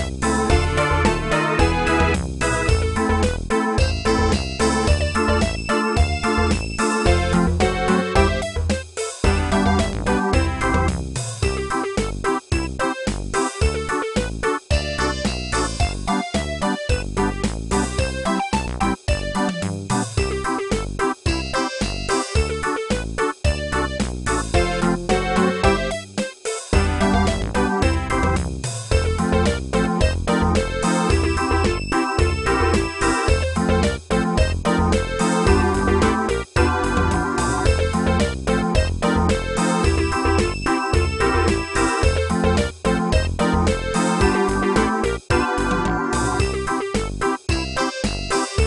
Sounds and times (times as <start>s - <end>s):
Music: 0.0s - 48.6s.